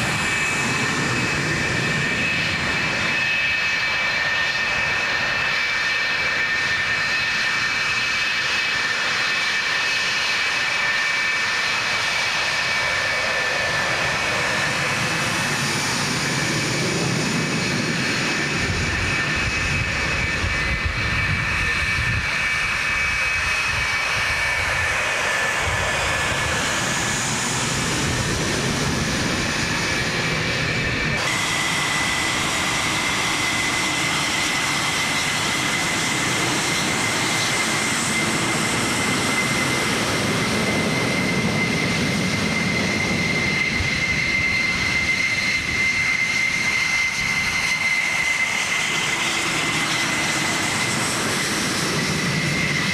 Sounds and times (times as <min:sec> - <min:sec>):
Fixed-wing aircraft, airplane: 0:00.0 - 0:52.9.